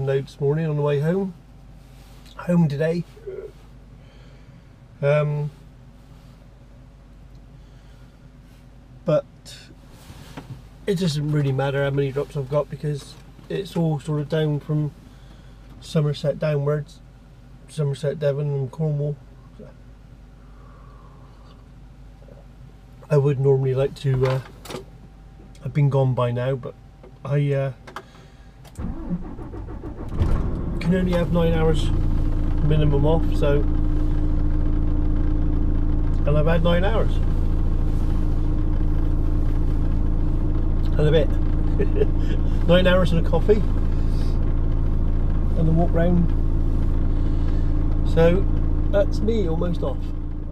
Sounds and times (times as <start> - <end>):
Speech: 0.0 - 1.4, 2.3 - 3.6, 5.0 - 5.6, 9.1 - 9.8, 10.9 - 15.0, 15.8 - 17.0, 17.7 - 19.8, 23.0 - 24.5, 25.6 - 27.8, 30.8 - 32.0, 32.6 - 33.7, 36.2 - 37.2, 40.9 - 41.4, 42.6 - 43.7, 45.6 - 46.4, 48.1 - 50.5.